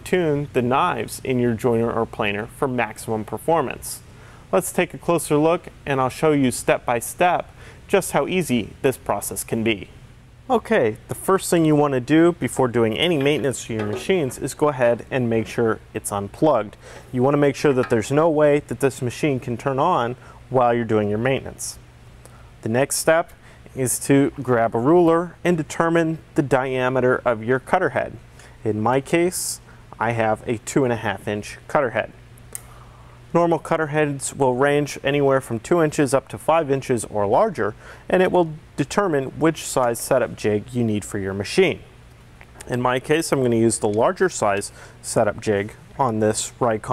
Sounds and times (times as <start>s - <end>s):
Speech: 0.0s - 21.8s, 22.6s - 32.2s, 33.3s - 41.9s, 42.6s - 46.9s.